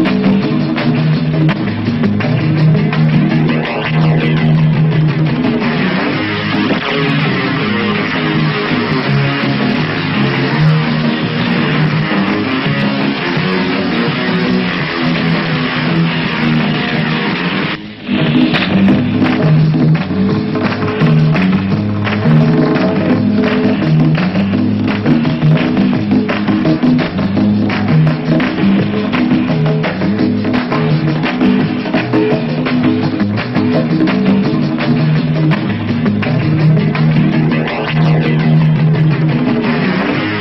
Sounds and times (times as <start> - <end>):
Electric guitar: 0.0 - 40.4.